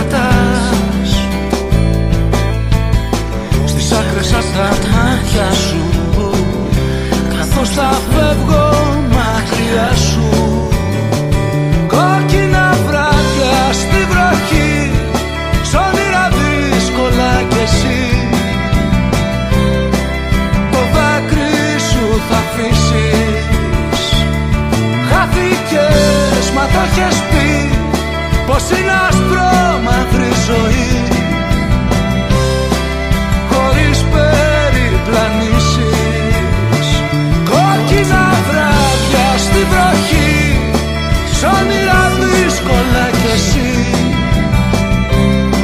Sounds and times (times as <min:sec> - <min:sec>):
Music: 0:00.0 - 0:45.6.